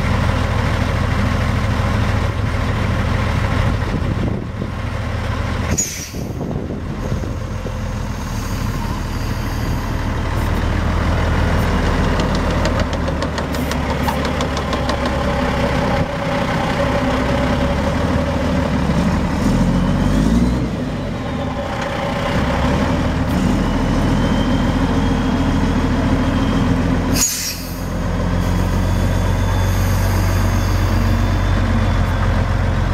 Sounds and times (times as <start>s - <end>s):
Truck: 0.0s - 32.9s.